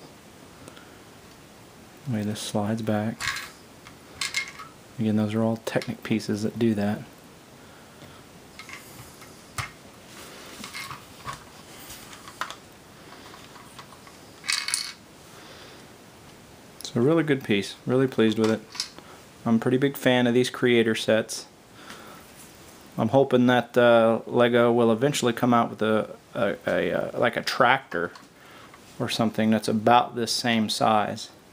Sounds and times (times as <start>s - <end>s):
Speech: 2.0s - 3.2s, 5.0s - 7.1s, 16.8s - 18.7s, 19.4s - 21.5s, 23.0s - 28.2s, 29.0s - 31.4s.